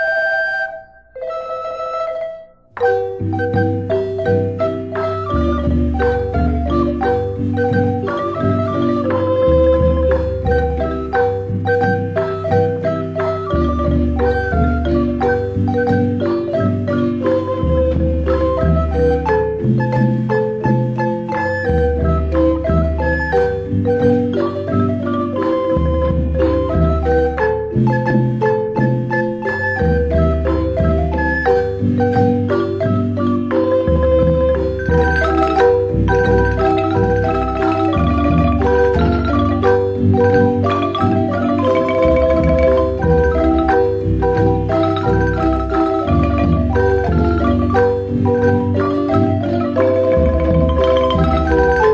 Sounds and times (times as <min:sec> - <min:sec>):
Music: 0:00.0 - 0:51.9.